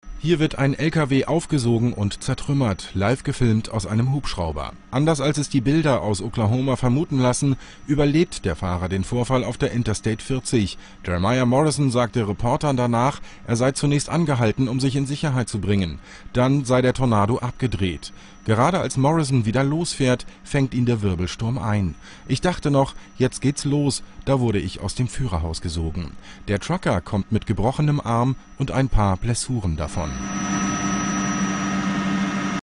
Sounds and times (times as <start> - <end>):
Speech: 0.2 - 30.2.